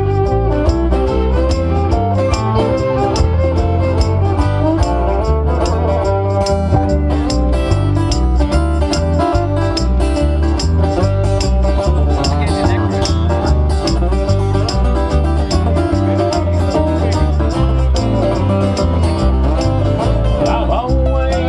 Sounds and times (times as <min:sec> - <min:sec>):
Banjo: 0:00.0 - 0:21.4.